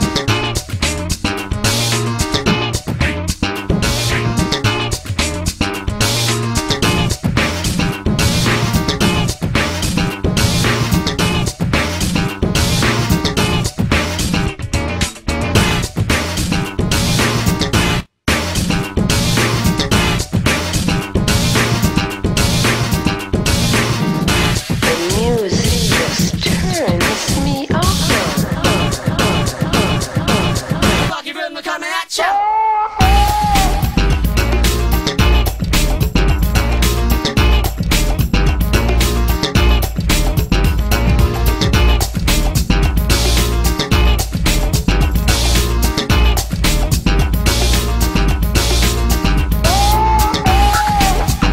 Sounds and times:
Music: 0:00.0 - 0:31.2, 0:33.0 - 0:51.5.

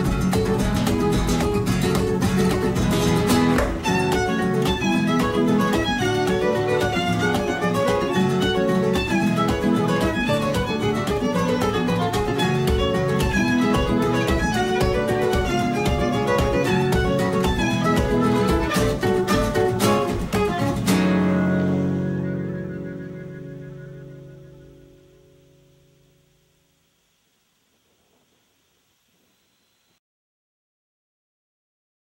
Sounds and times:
Double bass: 0:00.0 - 0:25.5.

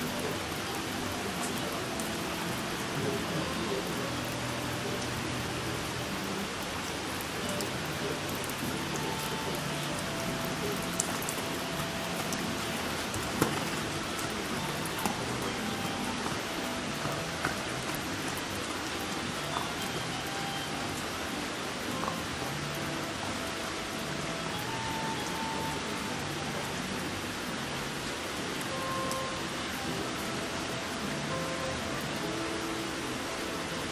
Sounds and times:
Rain on surface: 0:00.0 - 0:33.9
Raindrop: 0:00.0 - 0:33.9.

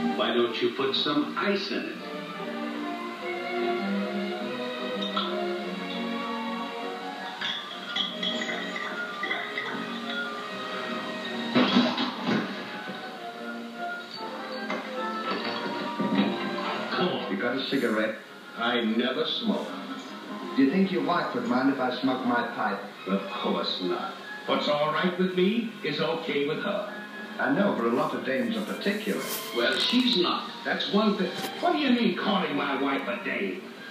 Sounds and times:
Music: 0:00.0 - 0:33.9
Speech: 0:00.2 - 0:02.0, 0:16.9 - 0:19.8, 0:20.6 - 0:33.7.

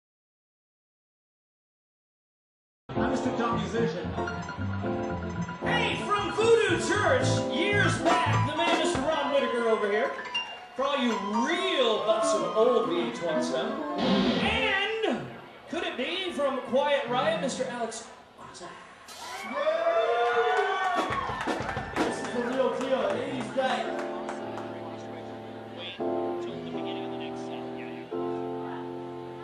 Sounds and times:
Music: 0:02.9 - 0:15.0, 0:21.0 - 0:29.4
Speech: 0:03.0 - 0:04.1, 0:05.7 - 0:10.2, 0:10.8 - 0:13.8, 0:14.4 - 0:18.9, 0:22.1 - 0:28.9.

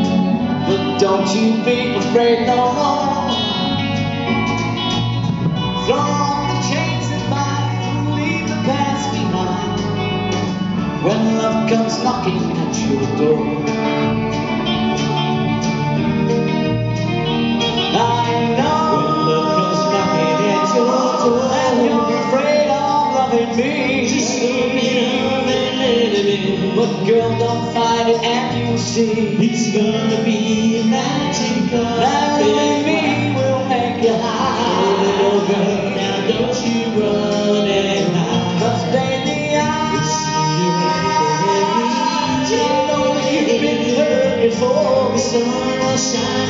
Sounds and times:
Music: 0:00.0 - 0:46.5.

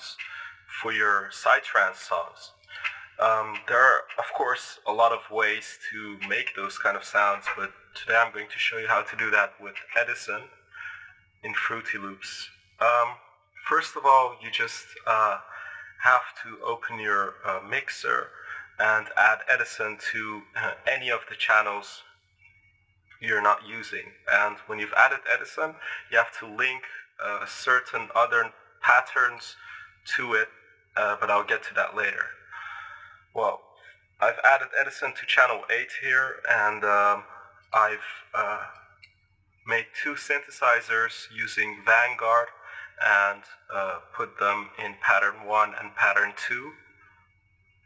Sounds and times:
Speech: 0:00.0 - 0:10.5, 0:11.4 - 0:22.1, 0:23.2 - 0:32.4, 0:33.4 - 0:33.6, 0:34.2 - 0:38.8, 0:39.7 - 0:46.8.

